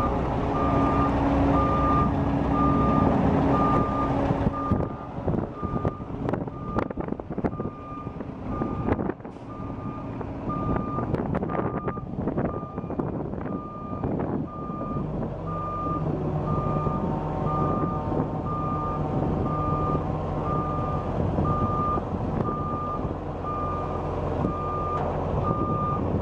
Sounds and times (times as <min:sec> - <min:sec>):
Reversing beeps: 0:00.6 - 0:04.9, 0:14.6 - 0:26.0.